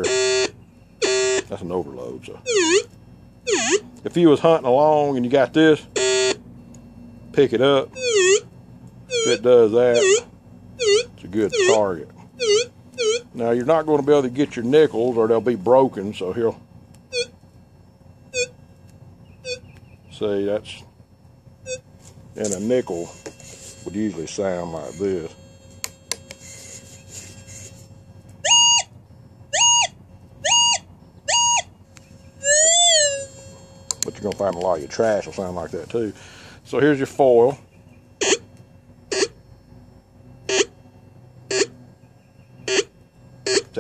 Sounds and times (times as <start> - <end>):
Speech: 1.5 - 2.5, 4.0 - 5.9, 7.4 - 7.9, 9.3 - 10.2, 11.2 - 12.2, 13.4 - 16.6, 20.1 - 20.9, 22.4 - 23.2, 23.8 - 25.4, 34.0 - 37.6.